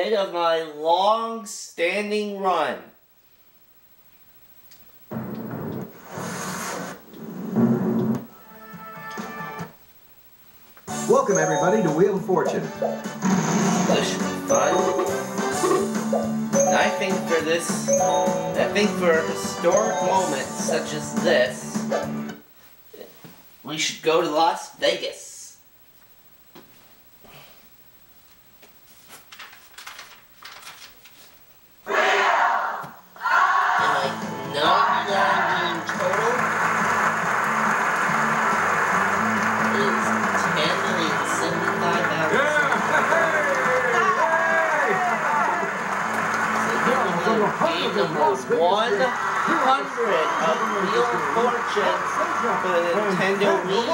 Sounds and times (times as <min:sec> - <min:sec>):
Speech: 0:00.0 - 0:03.0, 0:22.9 - 0:25.6, 0:46.7 - 0:53.9
Music: 0:07.3 - 0:09.8, 0:10.8 - 0:22.4, 0:33.7 - 0:53.9.